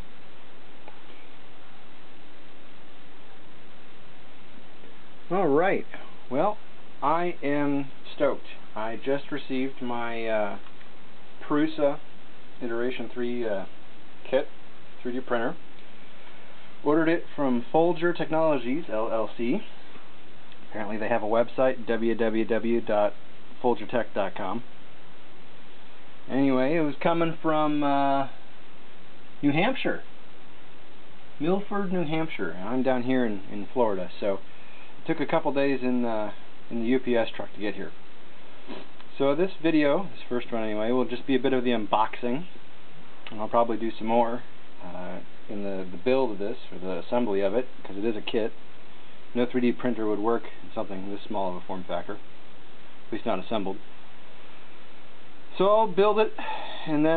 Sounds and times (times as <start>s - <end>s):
Speech: 5.3s - 10.7s, 11.4s - 15.6s, 16.8s - 19.9s, 20.7s - 24.7s, 26.3s - 28.4s, 29.4s - 30.1s, 31.4s - 38.0s, 38.7s - 42.6s, 43.3s - 48.6s, 49.3s - 52.3s, 53.1s - 53.9s, 55.5s - 57.1s.